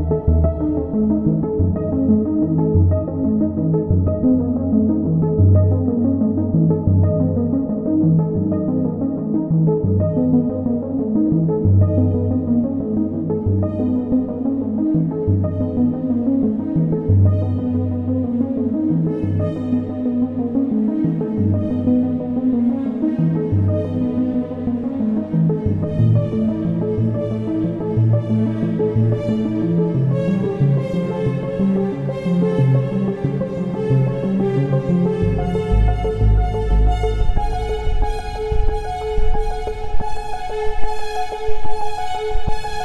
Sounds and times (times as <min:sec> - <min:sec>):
Background music: 0:00.0 - 0:42.8.